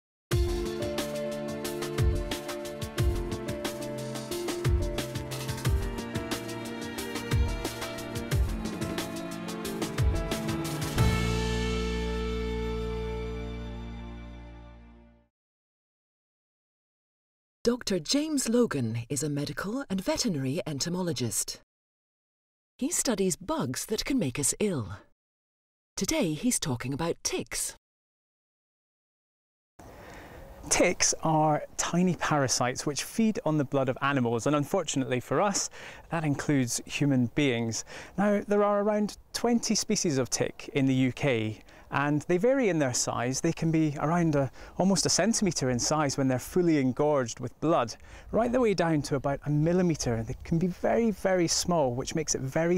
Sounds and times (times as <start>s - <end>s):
Speech: 17.7s - 21.6s, 22.8s - 25.0s, 26.0s - 27.8s, 30.7s - 52.7s.